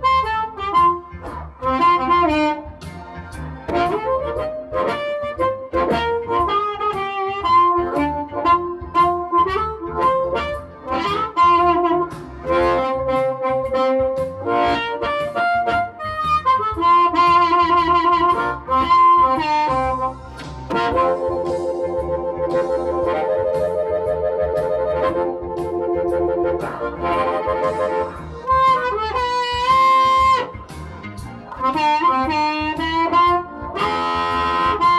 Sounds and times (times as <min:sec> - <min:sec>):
Harmonica: 0:00.0 - 0:34.9
Wind instrument, woodwind instrument: 0:00.0 - 0:34.9.